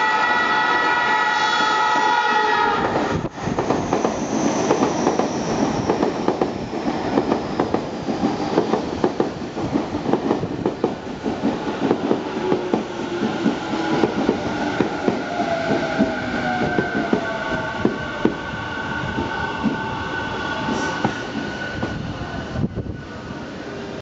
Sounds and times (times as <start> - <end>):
Outside, urban or manmade: 0.0 - 24.0
Train: 0.0 - 24.0.